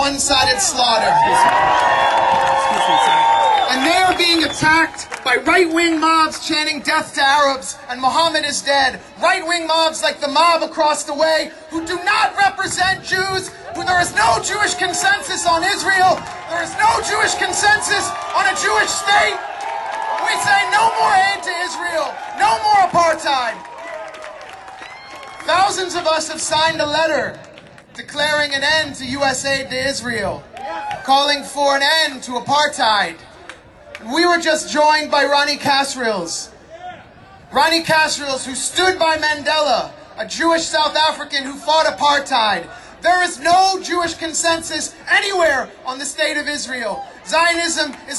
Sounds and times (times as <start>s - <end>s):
Male speech, man speaking: 0.0s - 1.6s, 2.5s - 19.4s, 20.2s - 23.6s, 25.4s - 27.4s, 28.0s - 30.4s, 31.1s - 33.2s, 34.0s - 36.5s, 37.5s - 48.1s
Narration, monologue: 3.6s - 23.6s, 25.4s - 33.3s, 34.0s - 36.7s, 37.5s - 48.1s.